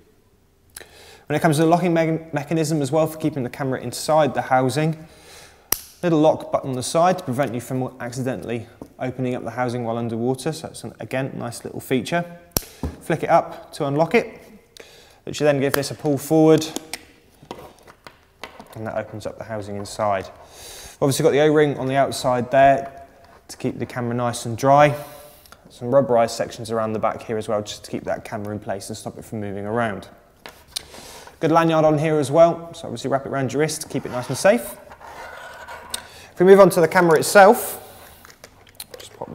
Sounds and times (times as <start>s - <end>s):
Speech: 1.3s - 5.0s, 6.0s - 12.4s, 13.0s - 14.4s, 15.2s - 16.8s, 18.8s - 20.3s, 21.0s - 25.0s, 25.7s - 30.2s, 31.4s - 34.8s, 36.4s - 37.8s, 38.9s - 39.3s.